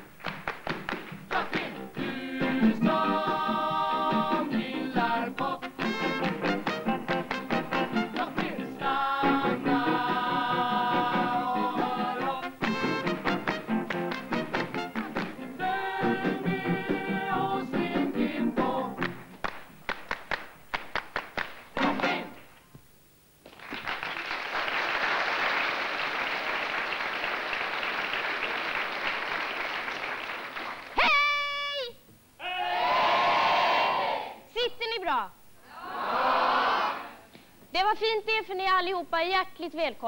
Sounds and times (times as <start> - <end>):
Speech: 34.5 - 35.4, 37.7 - 40.0.